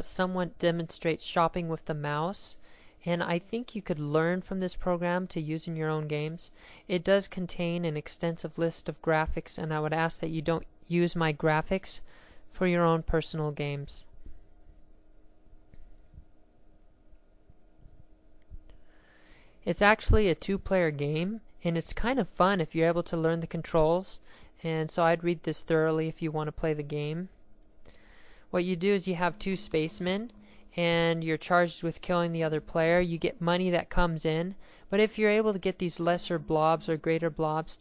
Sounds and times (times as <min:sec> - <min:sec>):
Speech: 0:00.0 - 0:14.1, 0:19.7 - 0:27.4, 0:28.5 - 0:37.8.